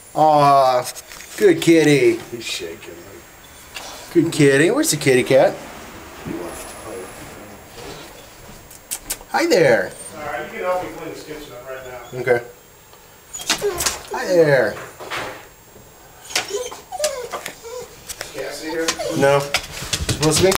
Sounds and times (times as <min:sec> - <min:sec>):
Speech: 0:00.2 - 0:03.2, 0:04.1 - 0:05.6, 0:09.3 - 0:12.6, 0:14.1 - 0:14.9, 0:18.3 - 0:19.6, 0:20.2 - 0:20.5
Domestic animals, pets: 0:13.3 - 0:14.1, 0:16.2 - 0:19.7
Door: 0:14.8 - 0:15.5.